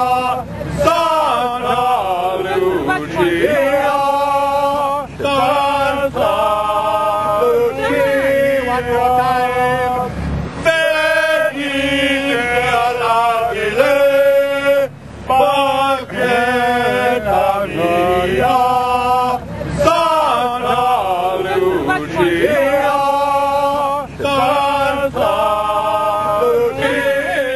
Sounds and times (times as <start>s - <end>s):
Male singing: 0.0s - 10.1s, 10.7s - 27.5s.